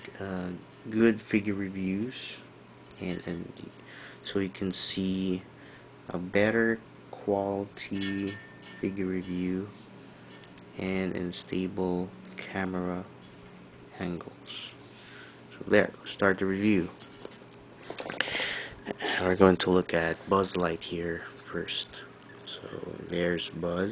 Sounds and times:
Speech: 0.2s - 5.5s, 6.1s - 9.8s, 10.8s - 13.1s, 13.9s - 14.8s, 15.6s - 17.0s, 19.2s - 23.9s.

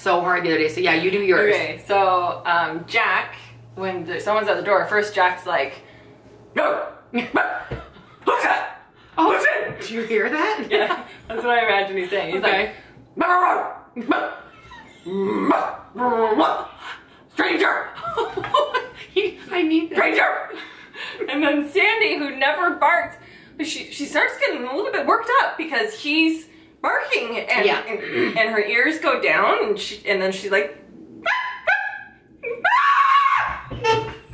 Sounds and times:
Laughter: 10.4s - 11.5s, 18.0s - 19.5s
Speech: 21.3s - 30.8s.

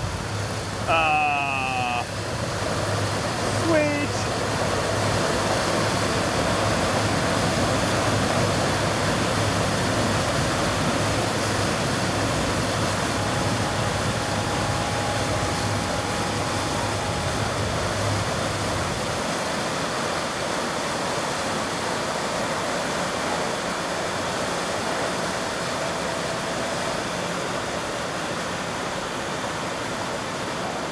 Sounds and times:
Fill (with liquid): 0.0s - 30.9s.

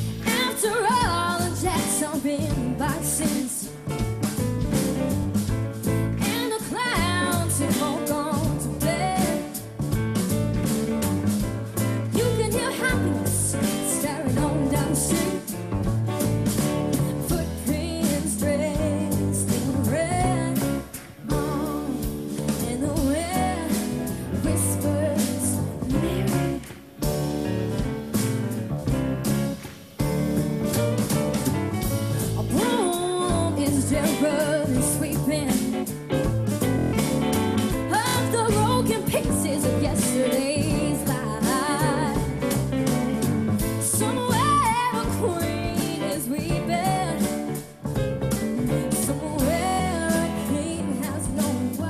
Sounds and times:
Jazz: 0.0s - 51.8s.

